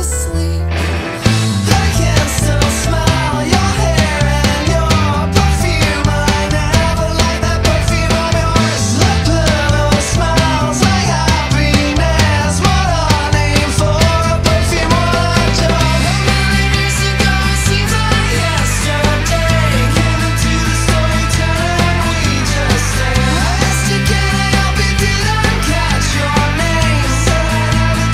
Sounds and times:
Music: 0:00.0 - 0:28.1.

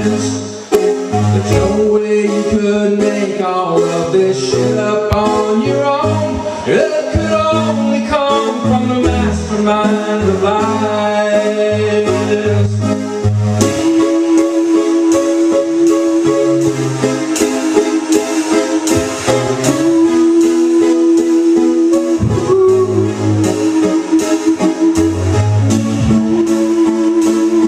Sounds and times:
Music: 0:00.0 - 0:27.6.

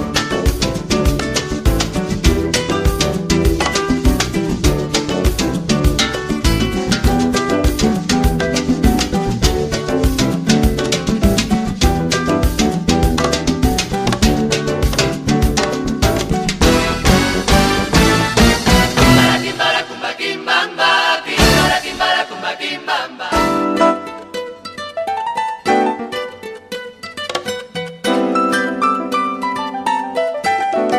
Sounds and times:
Happy music: 0:00.0 - 0:30.9
Salsa music: 0:00.0 - 0:30.9.

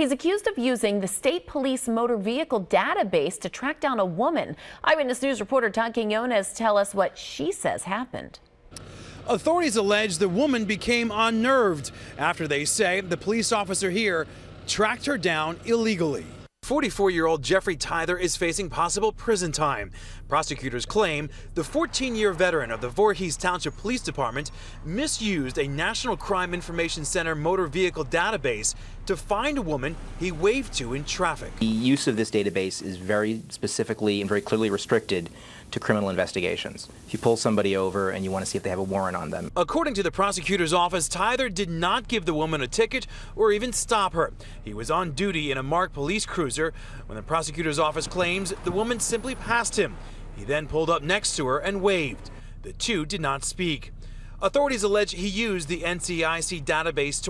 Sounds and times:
Speech: 0:00.0 - 0:08.4, 0:09.3 - 0:57.3.

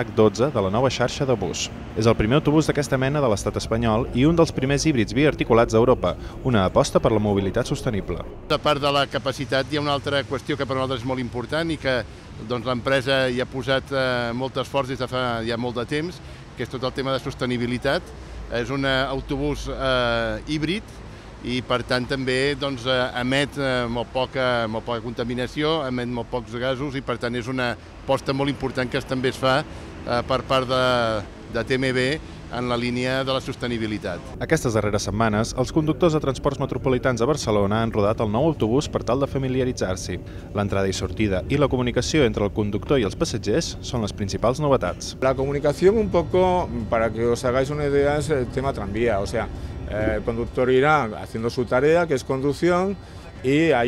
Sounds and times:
Speech: 0:00.0 - 0:20.8, 0:21.4 - 0:53.8.

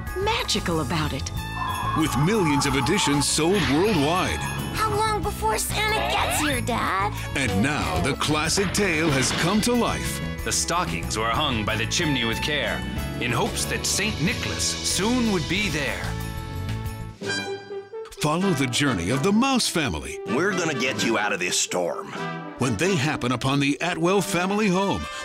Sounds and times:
Music: 0:00.0 - 0:25.2
Speech: 0:02.0 - 0:04.4, 0:07.4 - 0:16.1, 0:18.1 - 0:25.2.

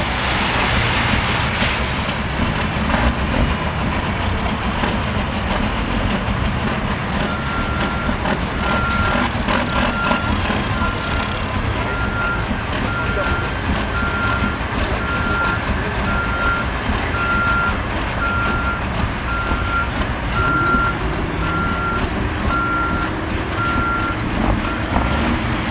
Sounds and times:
Reversing beeps: 0:07.3 - 0:24.9
Speech: 0:12.8 - 0:13.6.

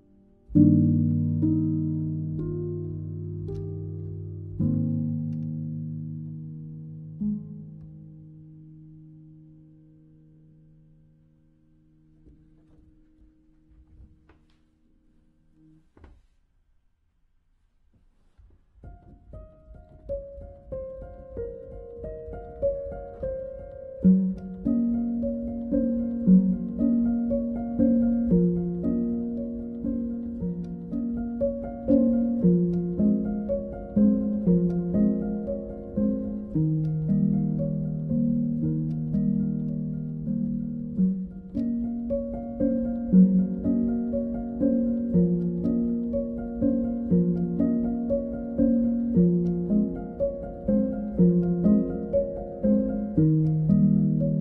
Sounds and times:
Piano: 0:00.0 - 0:16.9, 0:17.7 - 0:54.4
Inside, small room: 0:00.0 - 0:54.4.

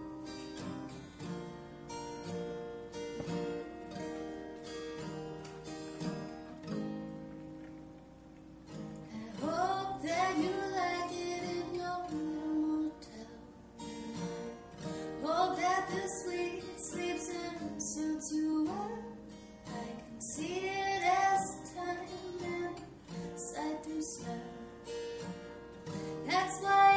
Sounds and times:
Music: 0:00.0 - 0:26.9.

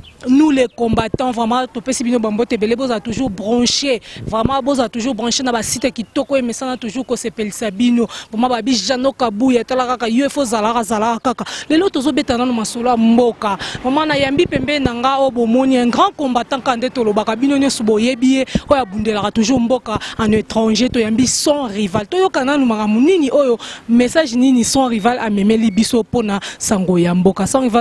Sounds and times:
Speech: 0:00.2 - 0:27.8.

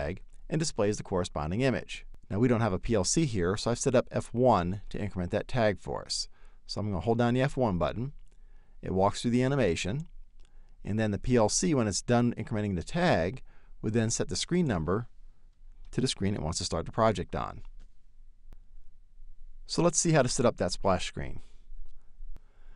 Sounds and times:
Speech: 0:00.0 - 0:08.2, 0:08.8 - 0:10.1, 0:10.8 - 0:15.1, 0:15.9 - 0:17.7, 0:19.7 - 0:21.5.

